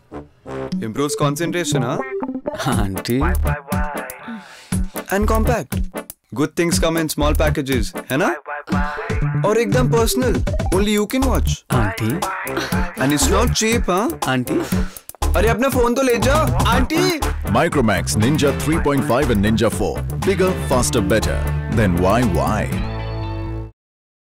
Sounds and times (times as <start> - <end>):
Music: 0.0 - 23.8
Speech: 0.8 - 2.0, 2.6 - 3.4, 5.1 - 5.7, 6.4 - 8.4, 9.4 - 12.2, 13.0 - 14.6, 15.4 - 22.8.